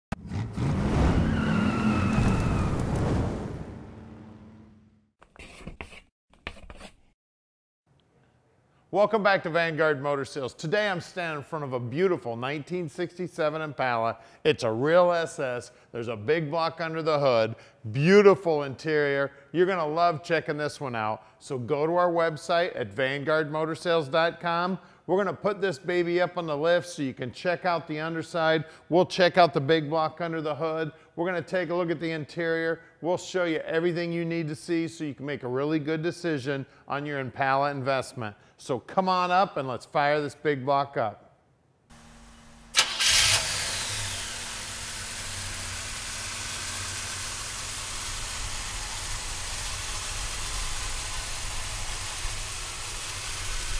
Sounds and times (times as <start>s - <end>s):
Tire squeal: 0.5s - 3.1s
Speech: 8.9s - 41.3s.